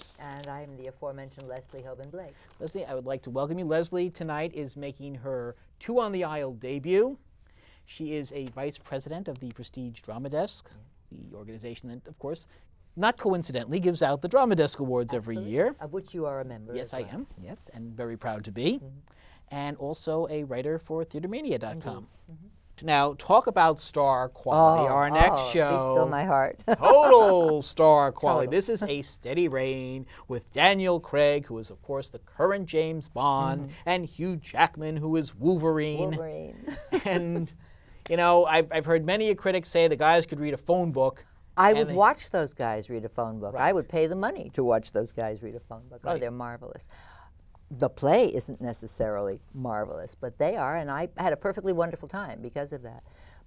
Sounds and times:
Speech: 13.0 - 15.8, 19.6 - 22.1, 22.8 - 36.6, 38.1 - 42.6, 45.7 - 46.8.

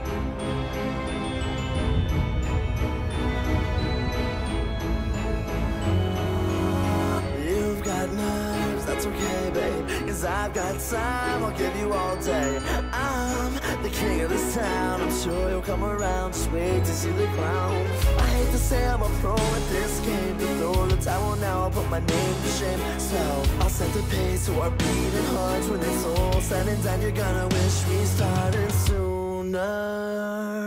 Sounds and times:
Music: 0.0 - 30.6.

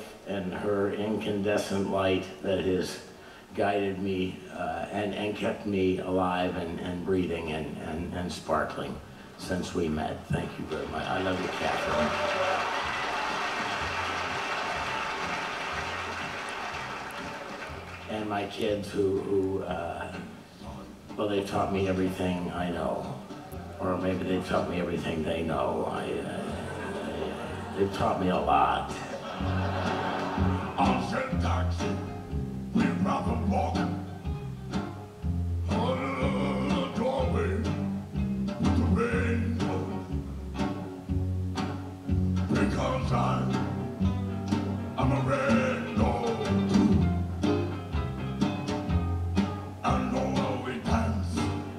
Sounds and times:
Speech: 0.0 - 12.4, 18.1 - 29.3, 30.8 - 32.0, 32.8 - 33.9
Music: 3.1 - 51.7.

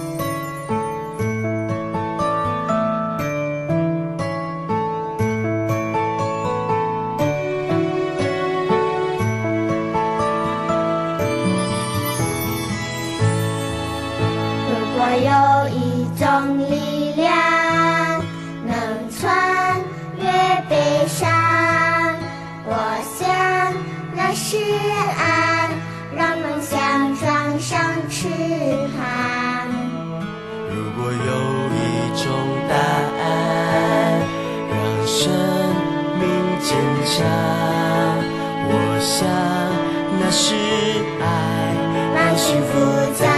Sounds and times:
Theme music: 7.0 - 15.1.

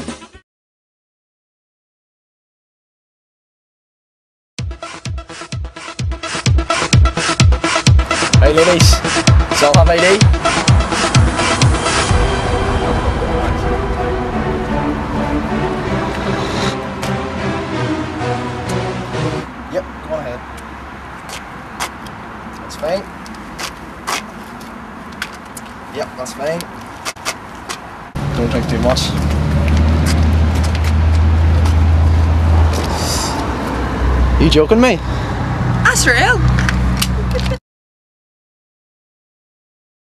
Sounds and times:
Music: 0.0 - 0.4, 4.6 - 19.5
Speech: 8.4 - 9.0, 9.6 - 10.2, 19.7 - 20.4, 22.7 - 23.1, 26.0 - 26.7, 28.4 - 29.2, 34.4 - 35.0, 35.9 - 36.4.

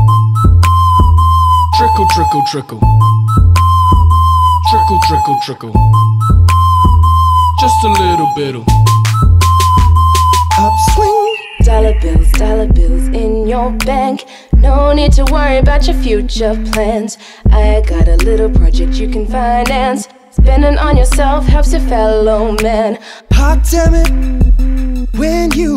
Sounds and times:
Music: 0.0 - 25.7.

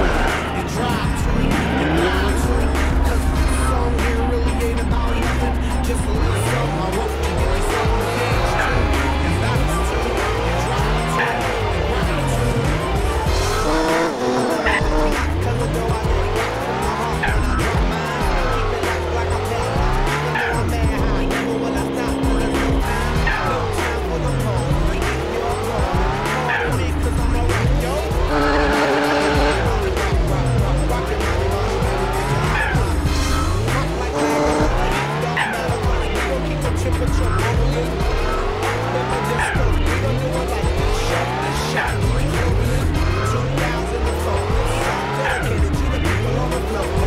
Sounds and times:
Car: 0.0 - 47.0
Music: 0.0 - 47.0.

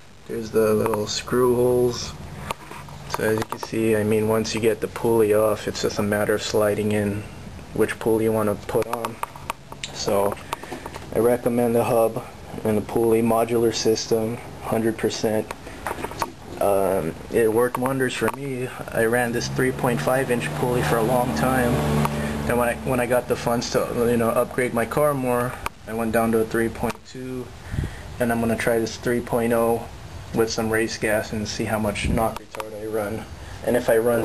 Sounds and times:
Speech: 0.3 - 2.2, 3.1 - 9.2, 9.9 - 10.4, 11.1 - 15.6, 16.5 - 27.5, 28.2 - 34.2.

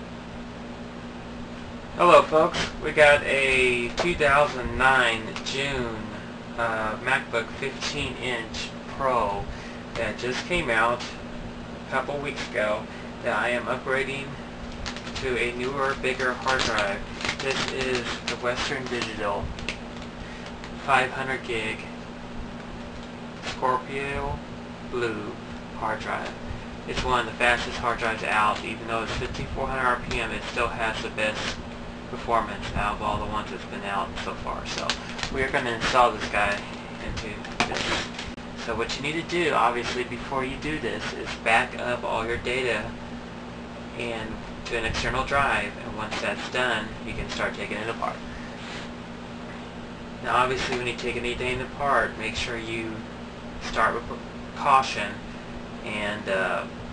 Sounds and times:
Inside, small room: 0.0 - 56.9
Speech: 2.0 - 11.2, 11.9 - 14.4, 15.2 - 19.5, 20.8 - 22.0, 23.4 - 38.0, 38.6 - 43.0, 43.9 - 48.2, 50.2 - 55.2, 55.8 - 56.8.

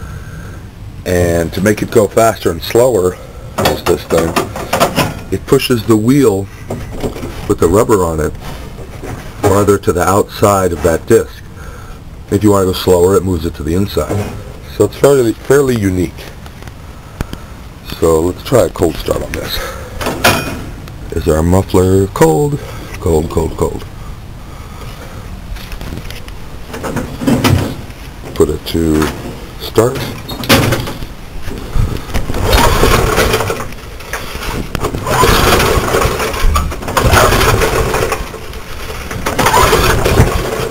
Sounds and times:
Speech: 1.0 - 4.4, 5.3 - 6.5, 7.5 - 8.4, 9.4 - 11.5, 12.3 - 16.4, 17.8 - 19.8, 21.1 - 23.9, 27.5 - 30.4.

